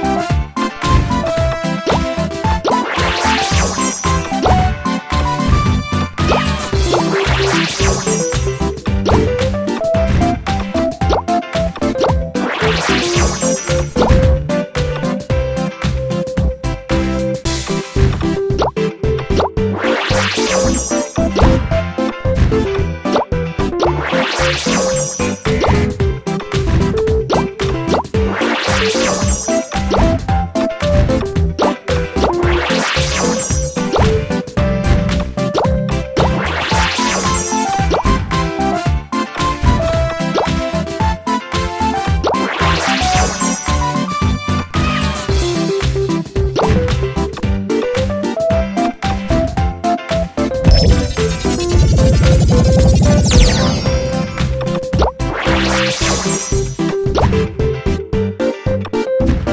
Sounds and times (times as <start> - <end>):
Music: 0.0 - 59.5.